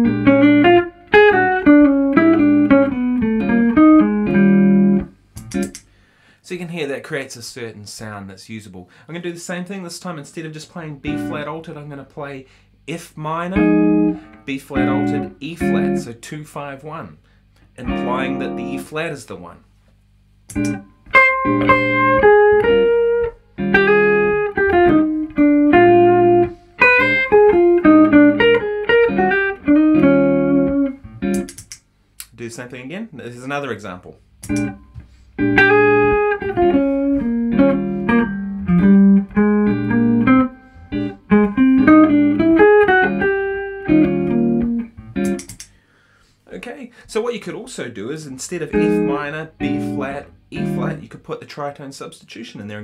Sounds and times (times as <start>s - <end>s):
Electric guitar: 0.0s - 5.8s, 13.6s - 16.0s, 20.5s - 31.8s, 34.4s - 45.7s, 48.7s - 51.0s
Inside, small room: 0.0s - 52.8s
Speech: 6.4s - 13.8s, 14.5s - 17.2s, 17.8s - 19.7s, 32.2s - 34.2s, 46.5s - 52.8s.